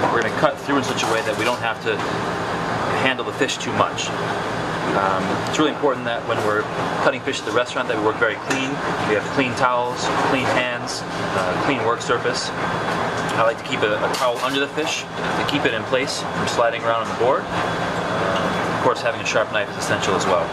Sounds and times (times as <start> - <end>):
Speech: 0.0 - 2.1, 2.9 - 4.2, 4.9 - 12.6, 13.3 - 20.5.